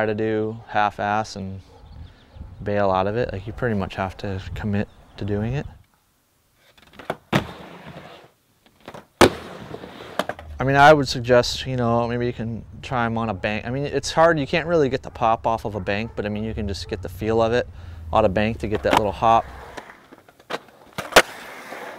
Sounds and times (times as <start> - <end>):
Skateboard: 6.6 - 10.5, 18.7 - 21.9.